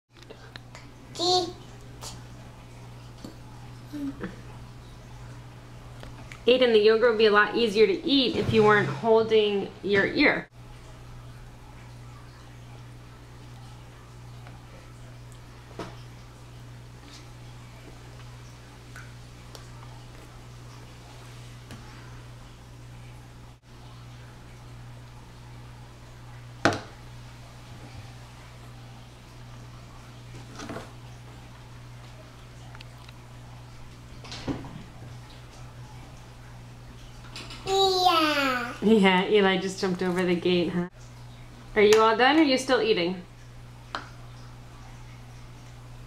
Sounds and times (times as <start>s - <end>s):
Speech: 6.5s - 10.5s, 41.8s - 43.2s.